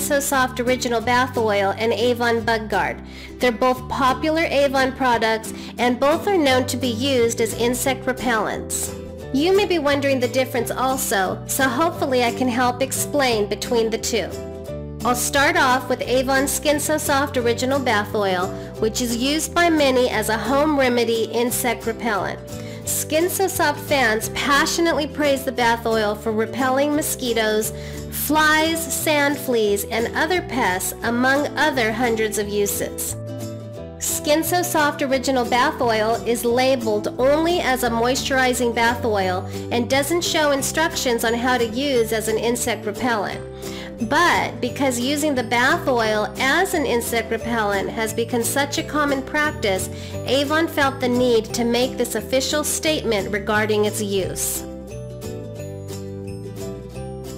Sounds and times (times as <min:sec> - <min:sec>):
Speech: 0:00.0 - 0:14.4, 0:15.1 - 0:33.1, 0:34.0 - 0:43.4, 0:44.1 - 0:54.6
Music: 0:00.0 - 0:57.3.